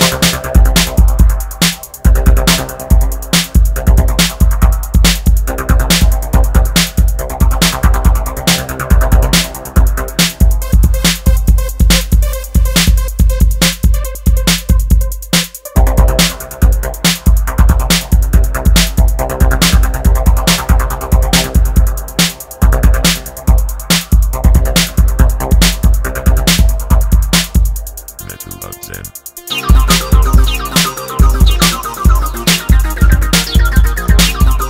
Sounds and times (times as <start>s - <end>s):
Techno: 0.0s - 34.7s.